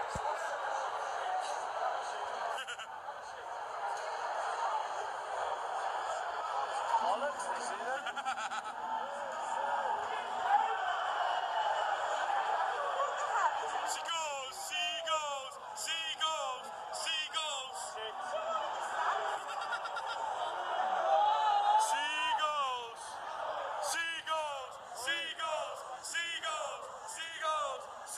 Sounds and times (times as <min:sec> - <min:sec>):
Speech: 0:12.6 - 0:19.6, 0:21.8 - 0:23.2, 0:23.8 - 0:28.1.